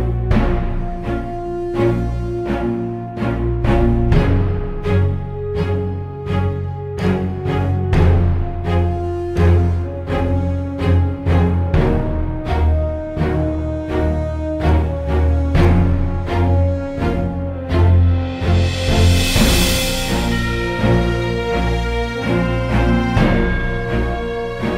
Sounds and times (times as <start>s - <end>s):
Background music: 0.0s - 24.7s.